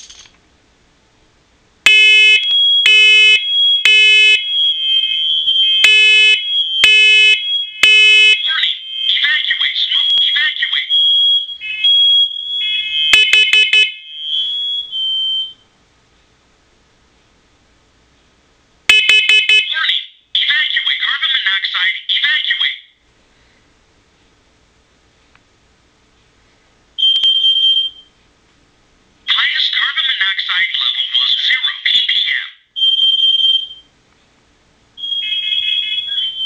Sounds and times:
Smoke detector, smoke alarm: 0:01.9 - 0:15.7, 0:18.9 - 0:19.8, 0:27.0 - 0:28.2, 0:32.8 - 0:33.9, 0:35.0 - 0:36.4.

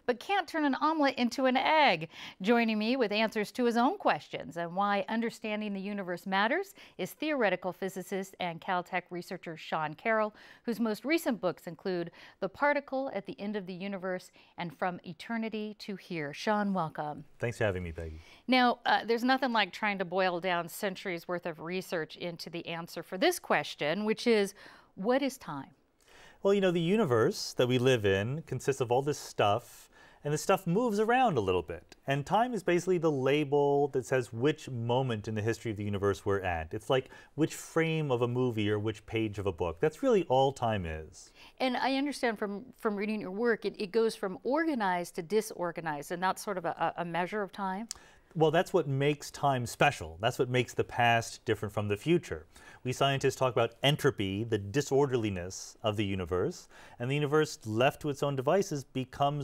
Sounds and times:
Speech: 0:00.1 - 0:25.7, 0:26.4 - 0:59.4.

